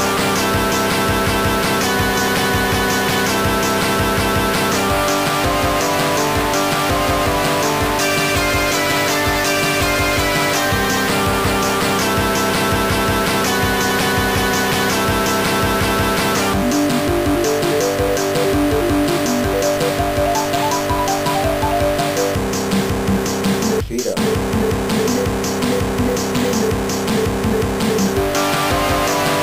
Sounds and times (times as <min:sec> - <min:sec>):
Soundtrack music: 0:00.0 - 0:29.4.